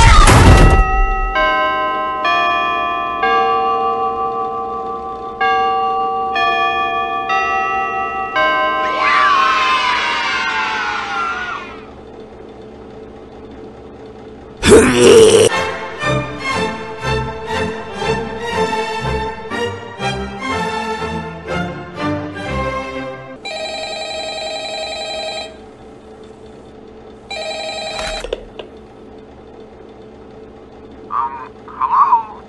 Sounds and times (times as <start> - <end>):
Music: 15.5 - 23.4.